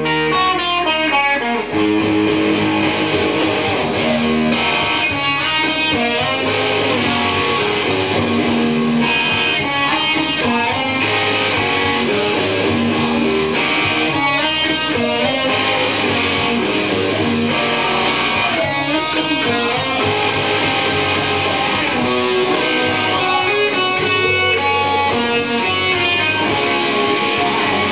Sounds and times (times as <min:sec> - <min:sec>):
Electric guitar: 0:00.0 - 0:27.9
Strum: 0:00.0 - 0:27.9.